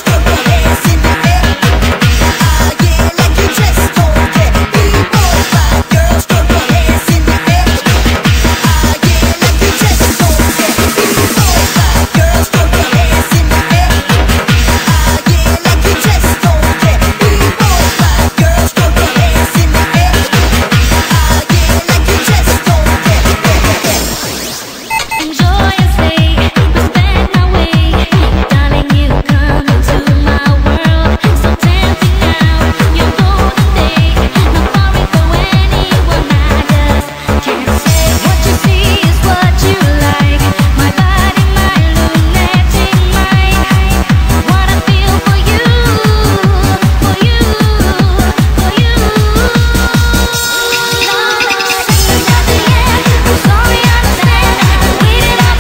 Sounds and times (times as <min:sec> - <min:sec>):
Techno: 0:00.0 - 0:55.6.